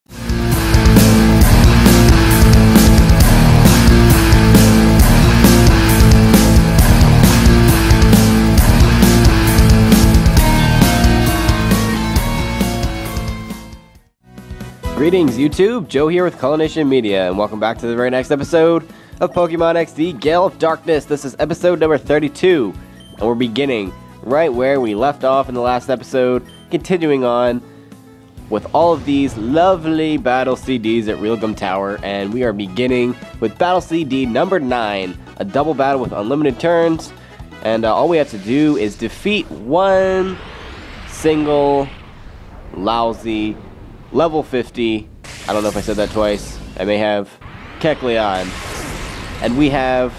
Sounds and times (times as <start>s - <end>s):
Progressive rock: 0.2s - 14.8s.